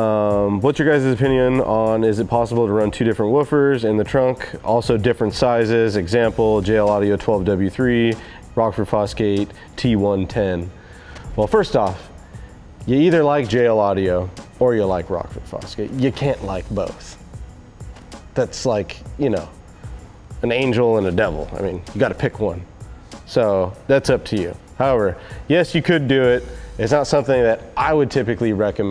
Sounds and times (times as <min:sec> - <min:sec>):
Speech: 0:00.0 - 0:10.7, 0:11.4 - 0:12.0, 0:12.9 - 0:17.2, 0:18.4 - 0:19.6, 0:20.4 - 0:22.6, 0:23.3 - 0:28.9
Music: 0:00.0 - 0:28.9.